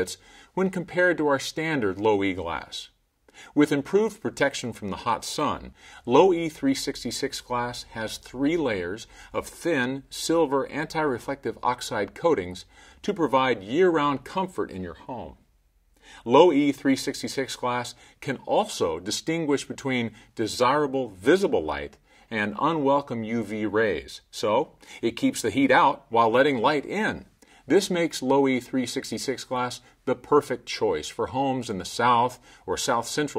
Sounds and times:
Speech: 0.0 - 15.4, 16.2 - 33.3.

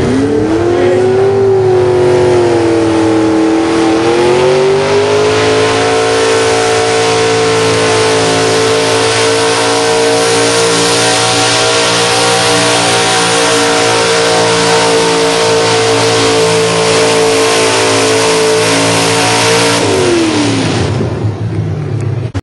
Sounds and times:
Vehicle: 0.0 - 22.4.

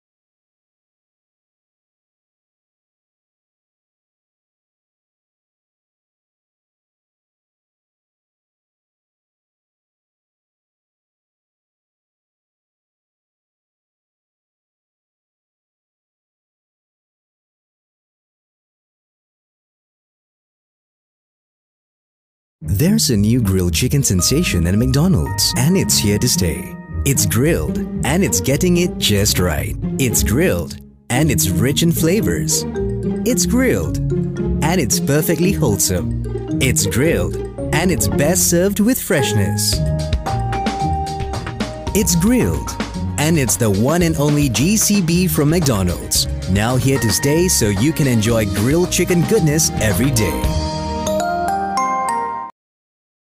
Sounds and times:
Speech: 22.6 - 32.6, 33.2 - 34.0, 34.6 - 39.8, 42.0 - 50.6
Music: 22.6 - 52.6.

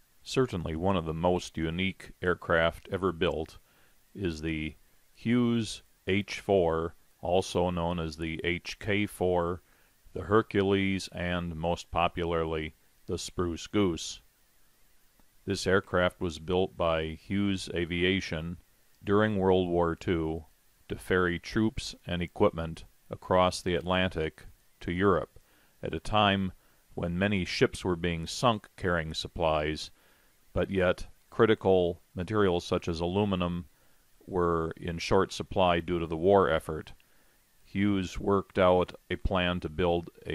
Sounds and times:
Speech: 0.2 - 3.6, 4.2 - 14.3, 15.4 - 30.0, 30.6 - 37.0, 37.6 - 40.3.

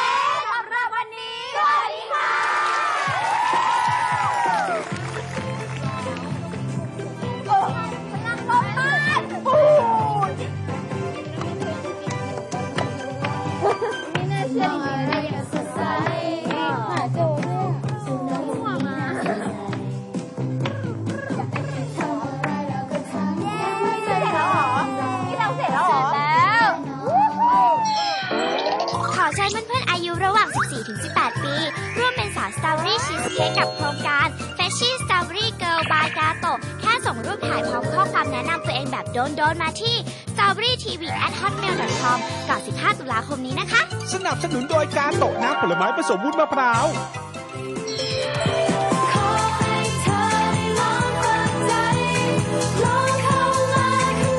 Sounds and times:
Music: 3.0 - 54.3.

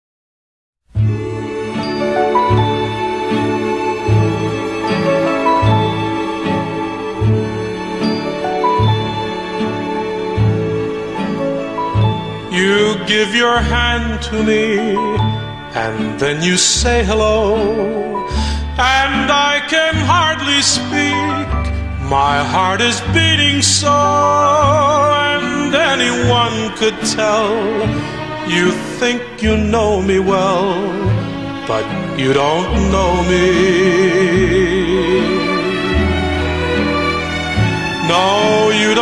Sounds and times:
Background music: 0.9 - 39.0.

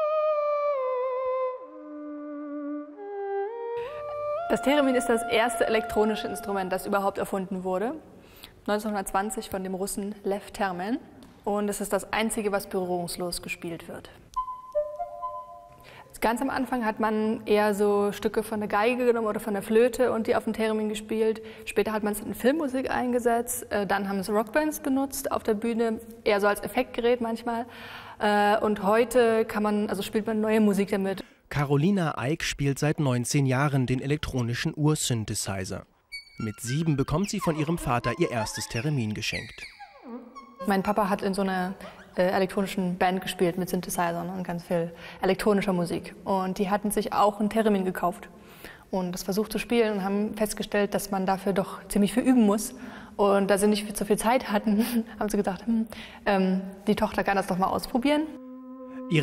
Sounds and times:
Speech: 4.5 - 8.0, 16.1 - 39.7, 40.6 - 48.2.

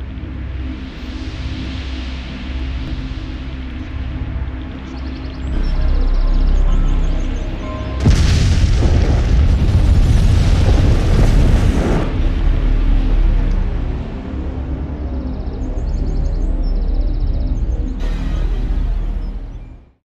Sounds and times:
Music: 0.0 - 20.0
Explosion: 8.0 - 13.9.

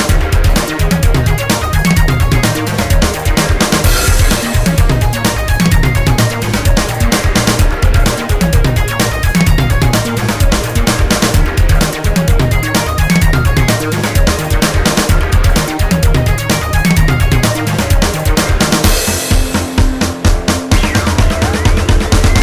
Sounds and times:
Exciting music: 0.0 - 22.4
House music: 0.0 - 22.4.

